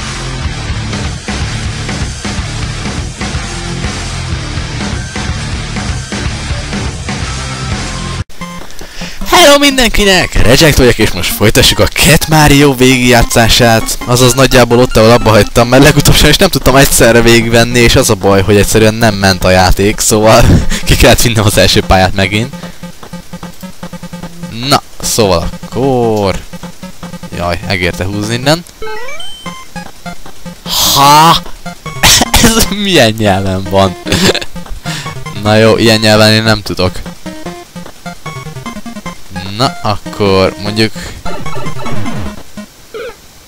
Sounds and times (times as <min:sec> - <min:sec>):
Music: 0:00.0 - 0:09.8, 0:10.4 - 0:18.5, 0:19.6 - 0:42.7
Speech: 0:09.3 - 0:22.5, 0:24.5 - 0:26.4, 0:27.3 - 0:28.6, 0:30.7 - 0:31.4, 0:32.1 - 0:34.0, 0:35.4 - 0:37.0, 0:39.4 - 0:42.1.